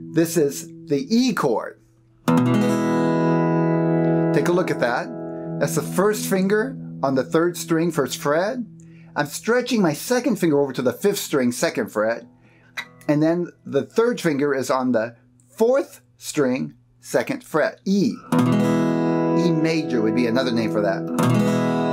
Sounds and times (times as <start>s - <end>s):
Speech: 0.2s - 1.8s, 4.4s - 12.3s, 13.1s - 18.3s, 19.4s - 21.1s
Strum: 2.2s - 14.9s, 18.1s - 21.9s.